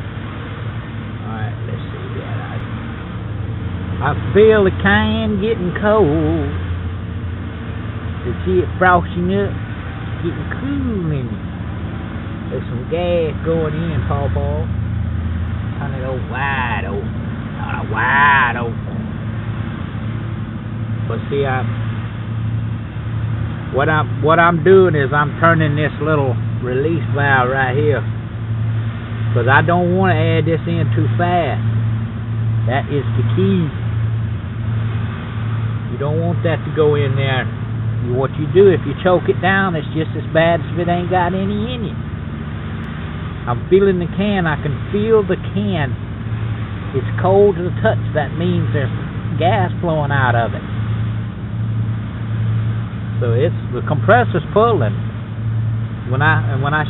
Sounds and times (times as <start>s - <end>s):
Outside, urban or manmade: 0.0s - 56.8s
Speech: 1.2s - 2.6s, 4.0s - 6.6s, 8.2s - 9.6s, 10.2s - 11.4s, 12.5s - 14.7s, 15.8s - 19.0s, 21.1s - 21.7s, 23.7s - 28.1s, 29.3s - 31.6s, 32.6s - 33.8s, 35.9s - 42.0s, 43.5s - 46.0s, 47.0s - 50.6s, 53.2s - 55.0s, 56.1s - 56.8s.